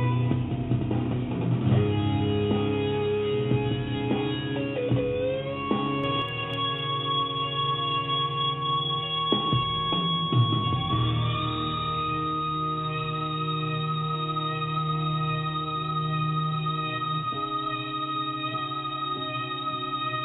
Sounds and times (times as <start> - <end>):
Music: 0.0 - 20.2.